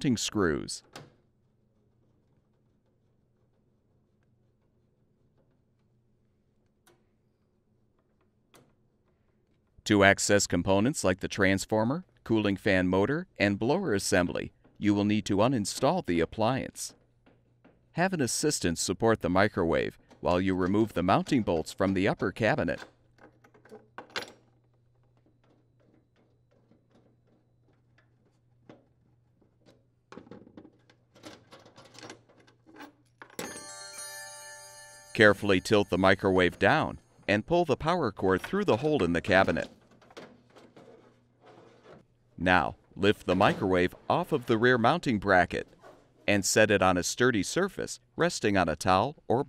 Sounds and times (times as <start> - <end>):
Speech: 0.0 - 0.9, 9.8 - 17.0, 18.0 - 22.9, 35.2 - 39.8, 42.4 - 45.7, 46.3 - 49.4
Music: 33.4 - 36.2.